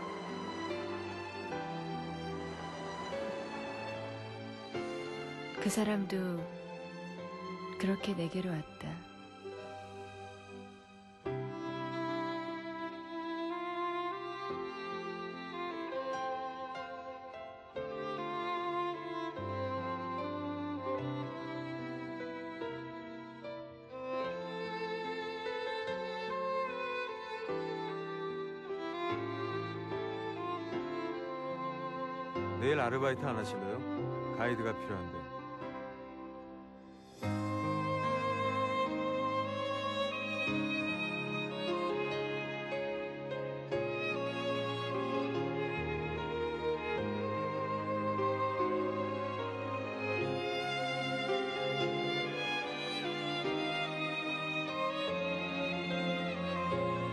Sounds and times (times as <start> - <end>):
Music: 0.0 - 57.1.